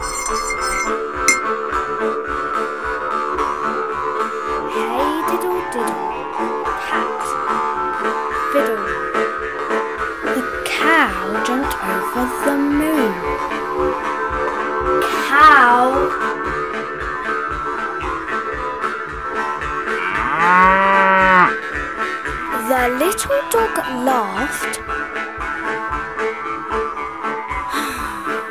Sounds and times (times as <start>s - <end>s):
Music: 0.0s - 28.5s
Speech: 4.7s - 7.4s, 8.4s - 9.0s, 10.2s - 13.4s, 15.0s - 16.2s, 22.5s - 24.8s.